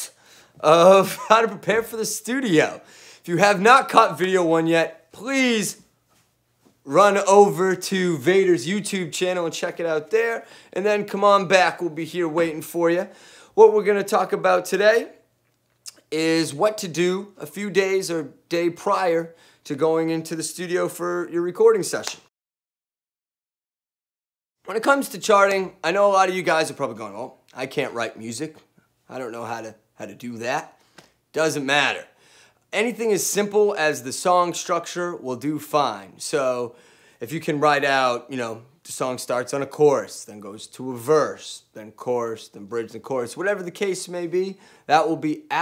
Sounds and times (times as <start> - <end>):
Speech: 0.0 - 5.8, 6.9 - 15.2, 15.9 - 22.3, 24.7 - 45.6.